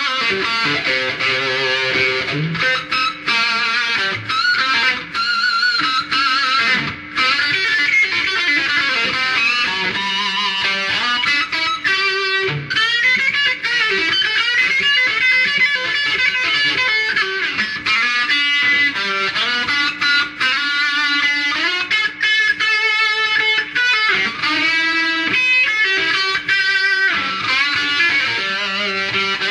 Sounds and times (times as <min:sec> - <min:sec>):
Tapping (guitar technique): 0:00.0 - 0:29.5.